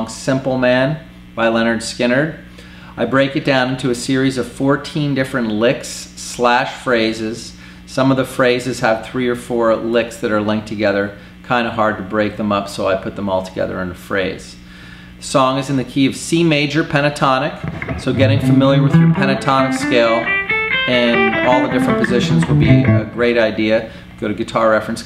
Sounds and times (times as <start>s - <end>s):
Speech: 0.0s - 20.2s, 20.9s - 25.0s
Tapping (guitar technique): 17.6s - 23.5s
Bass guitar: 17.6s - 23.6s.